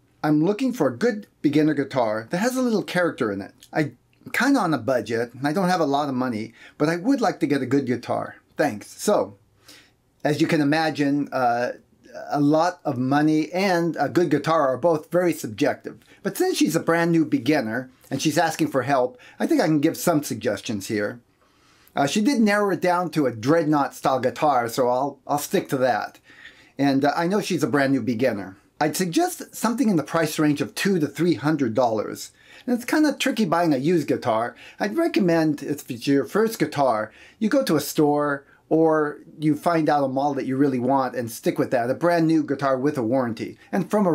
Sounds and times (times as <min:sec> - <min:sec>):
Speech: 0:00.2 - 0:09.4, 0:10.2 - 0:21.2, 0:22.0 - 0:26.2, 0:26.8 - 0:44.1.